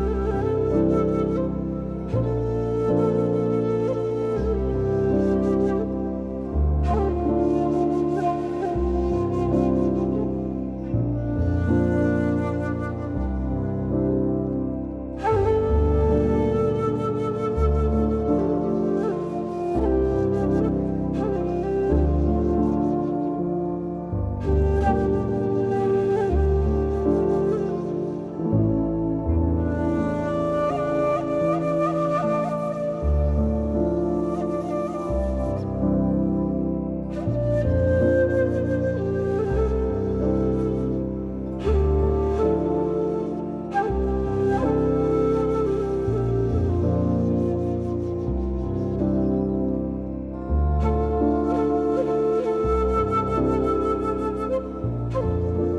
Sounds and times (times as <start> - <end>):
New-age music: 0.0 - 55.7.